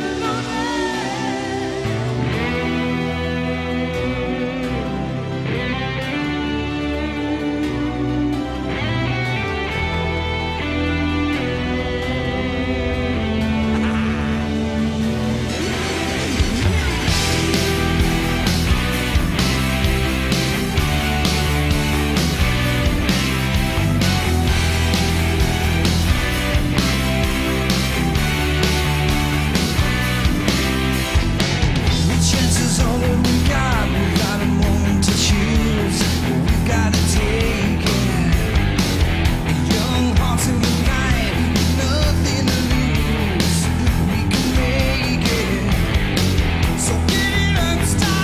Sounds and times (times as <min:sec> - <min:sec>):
Rock and roll: 0:00.0 - 0:48.2.